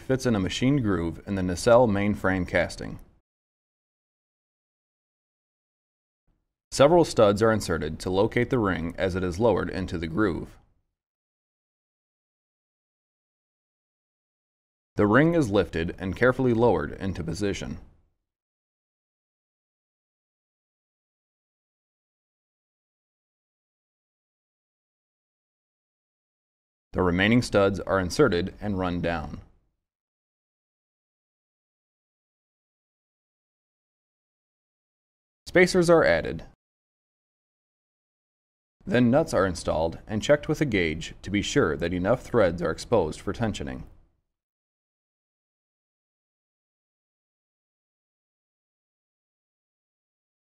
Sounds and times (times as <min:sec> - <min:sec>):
Speech: 0:00.0 - 0:03.1, 0:06.7 - 0:10.6, 0:15.0 - 0:17.9, 0:27.0 - 0:29.5, 0:35.5 - 0:36.6, 0:38.8 - 0:43.9.